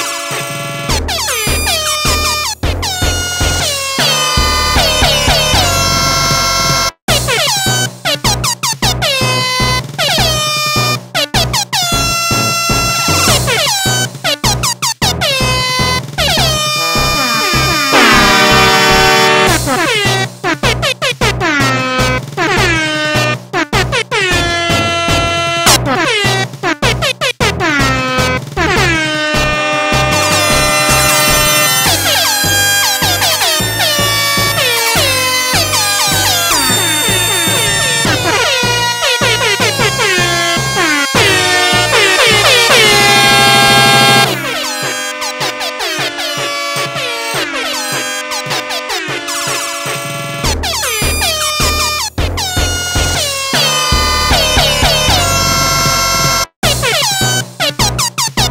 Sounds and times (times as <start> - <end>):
Air horn, truck horn: 0.0 - 1.0, 3.8 - 7.0, 16.4 - 20.0, 24.4 - 25.8, 28.8 - 50.9, 53.2 - 56.8
Soundtrack music: 16.2 - 20.1, 27.8 - 56.8
Cacophony: 16.4 - 19.7, 29.5 - 52.1.